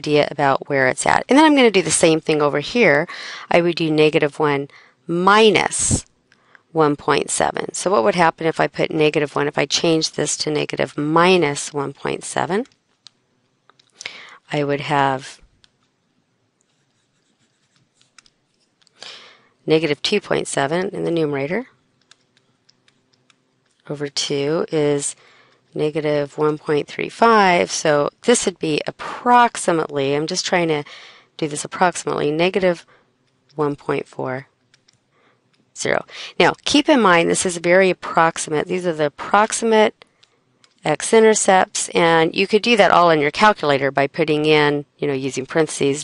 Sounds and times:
Speech: 0:00.0 - 0:06.1, 0:06.8 - 0:12.7, 0:14.4 - 0:15.4, 0:19.7 - 0:21.7, 0:23.9 - 0:25.2, 0:25.8 - 0:32.9, 0:33.6 - 0:34.5, 0:35.8 - 0:40.0, 0:40.8 - 0:46.0
Inside, small room: 0:00.0 - 0:46.0.

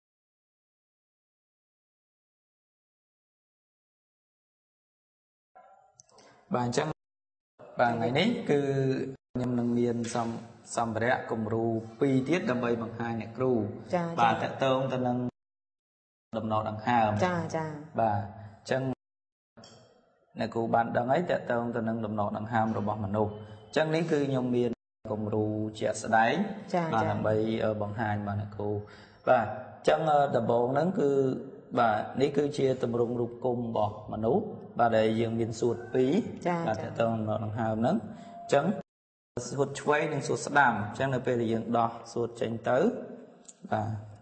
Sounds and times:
Speech: 0:06.5 - 0:07.0, 0:07.6 - 0:15.4, 0:16.4 - 0:19.0, 0:20.4 - 0:44.1.

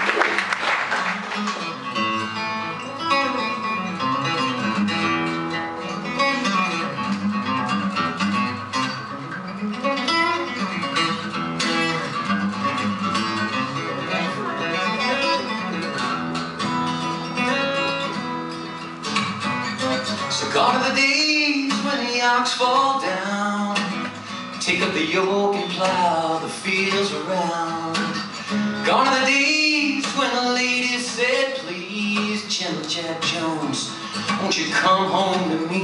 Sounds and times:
Acoustic guitar: 0:00.0 - 0:35.8.

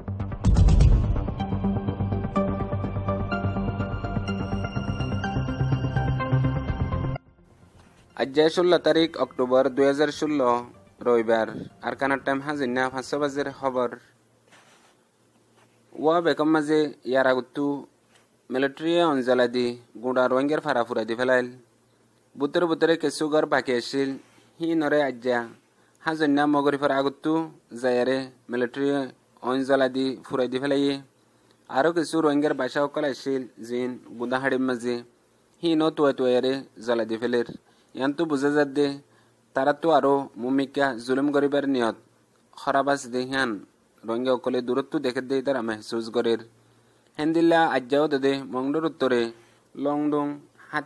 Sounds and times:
Speech: 0:08.2 - 0:14.1, 0:15.9 - 0:17.9, 0:18.5 - 0:21.6, 0:22.4 - 0:31.1, 0:31.7 - 0:46.5, 0:47.2 - 0:50.8.

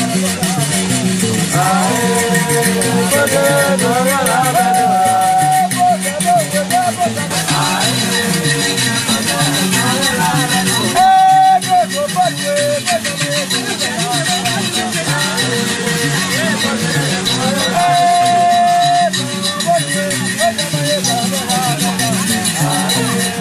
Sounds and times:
Music: 0:00.0 - 0:23.4.

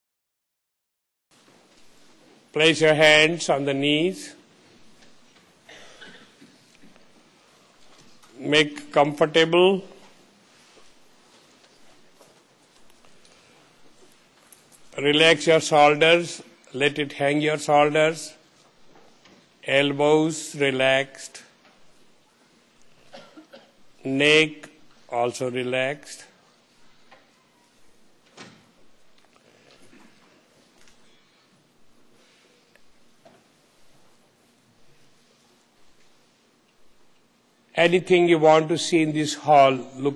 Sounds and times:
Speech: 0:02.5 - 0:04.4, 0:08.4 - 0:10.0, 0:14.9 - 0:18.4, 0:19.6 - 0:21.6, 0:24.0 - 0:26.4, 0:37.8 - 0:40.1.

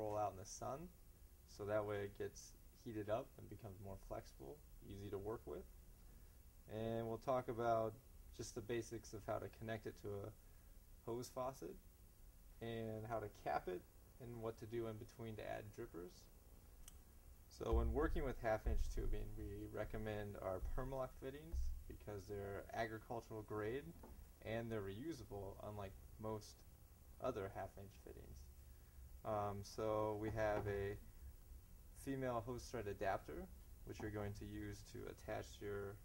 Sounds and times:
Speech: 0:00.0 - 0:05.7, 0:06.7 - 0:10.4, 0:11.0 - 0:11.8, 0:12.6 - 0:16.3, 0:17.5 - 0:28.5, 0:29.2 - 0:31.0, 0:32.0 - 0:36.0.

